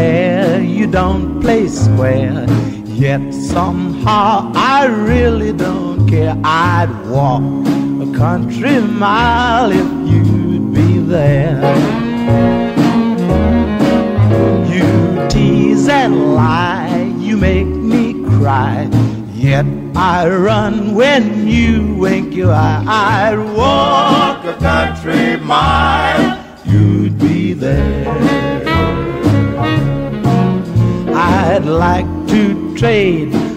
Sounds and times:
Bluegrass: 0.0 - 33.5.

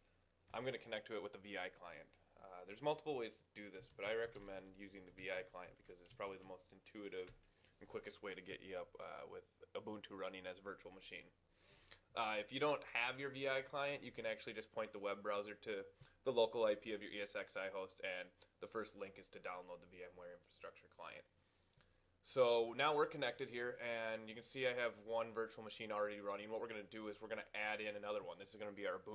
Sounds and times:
Speech: 0.5 - 11.4, 12.1 - 21.3, 22.2 - 29.1.

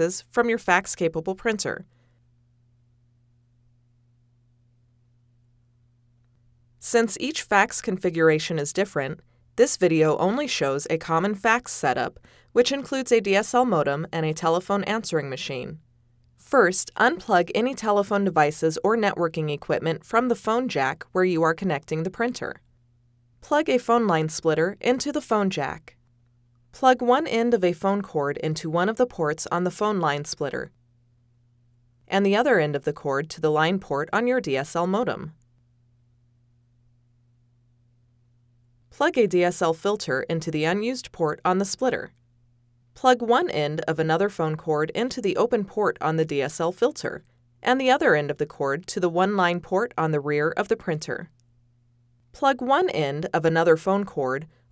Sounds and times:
Speech: 0.0 - 1.9, 6.8 - 15.8, 16.4 - 22.6, 23.4 - 25.9, 26.8 - 30.7, 32.1 - 35.4, 39.0 - 42.1, 43.0 - 51.3, 52.4 - 54.5.

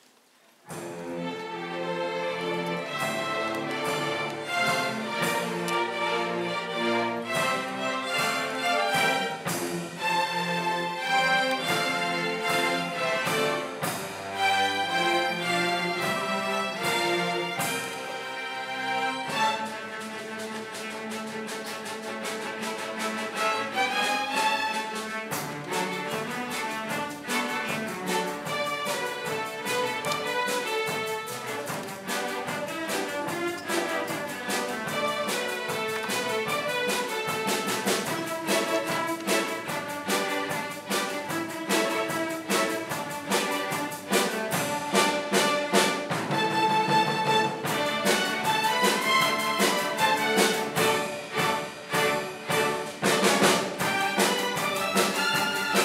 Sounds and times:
Orchestra: 0.0 - 55.8.

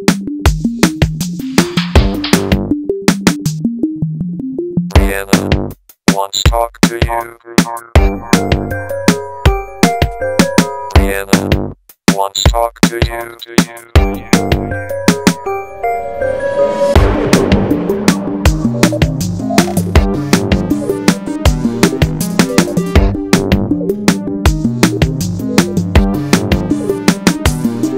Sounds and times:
Soundtrack music: 0.6 - 11.6, 12.2 - 27.9.

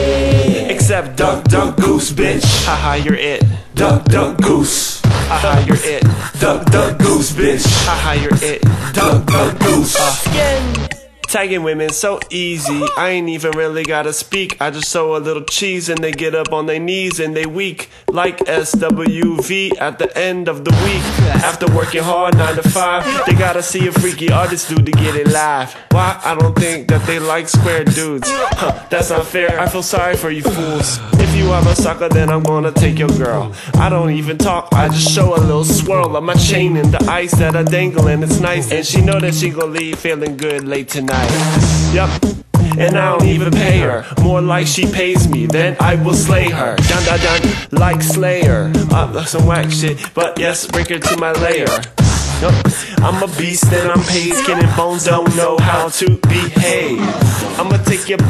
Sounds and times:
Music: 0.0 - 15.0, 15.9 - 58.3.

